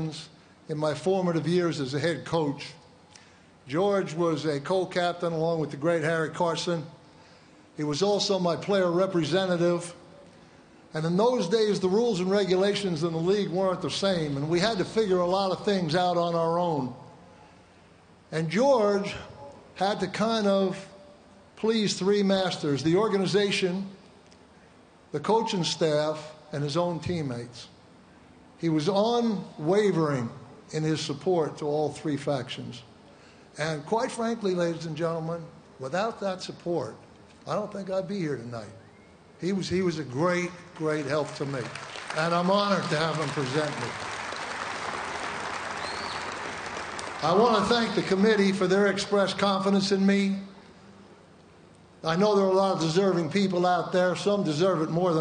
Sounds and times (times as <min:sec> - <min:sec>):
Male speech, man speaking: 0:00.0 - 0:02.8, 0:03.7 - 0:07.0, 0:07.8 - 0:10.0, 0:10.9 - 0:17.1, 0:18.3 - 0:21.0, 0:21.6 - 0:24.0, 0:25.1 - 0:27.8, 0:28.6 - 0:32.9, 0:33.6 - 0:38.8, 0:39.4 - 0:44.0, 0:47.2 - 0:50.5, 0:52.0 - 0:55.2
Narration, monologue: 0:00.0 - 0:44.3, 0:47.0 - 0:55.2.